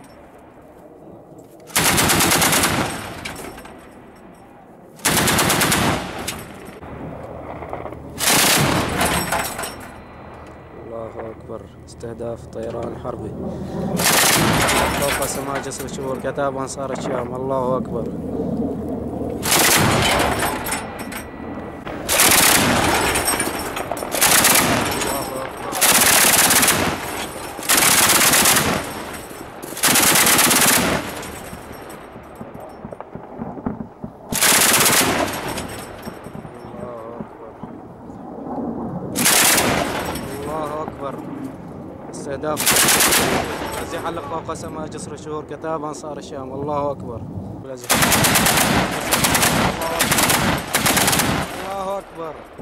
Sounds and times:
Machine gun: 0:01.7 - 0:03.3, 0:05.0 - 0:06.6, 0:08.2 - 0:09.4, 0:14.0 - 0:15.7, 0:19.4 - 0:20.7, 0:22.0 - 0:31.6, 0:34.3 - 0:36.4, 0:39.2 - 0:40.6, 0:42.6 - 0:44.2, 0:47.9 - 0:52.0.

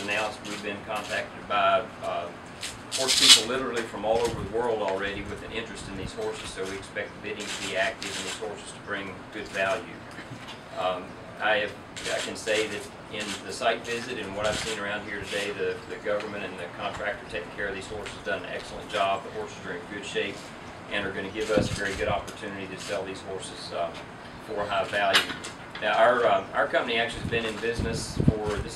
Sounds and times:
Speech: 0:00.0 - 0:10.1, 0:10.8 - 0:28.7.

